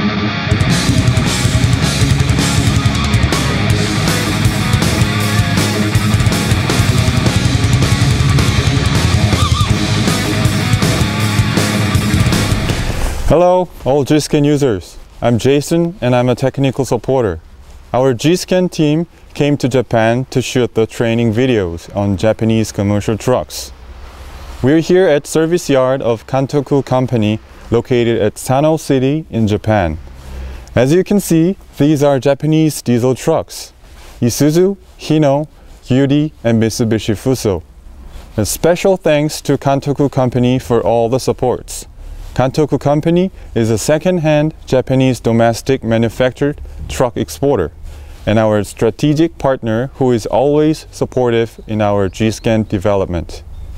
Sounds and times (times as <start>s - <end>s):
Speech: 13.2s - 23.8s, 24.6s - 30.0s, 30.8s - 37.7s, 38.4s - 53.5s.